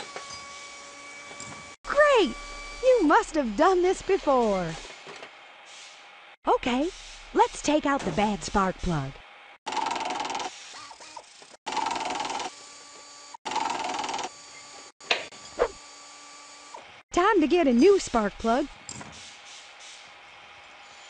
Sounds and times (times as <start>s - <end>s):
Speech: 1.9s - 4.8s, 6.5s - 9.2s, 17.1s - 18.7s.